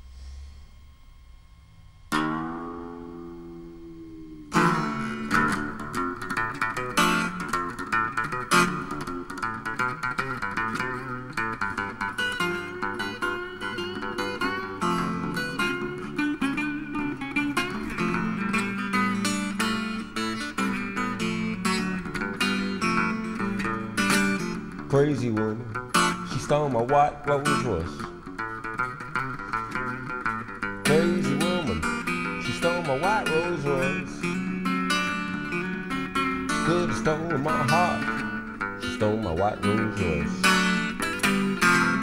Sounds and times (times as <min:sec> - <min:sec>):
Electric guitar: 0:00.0 - 0:42.0
Acoustic guitar: 0:02.1 - 0:42.0.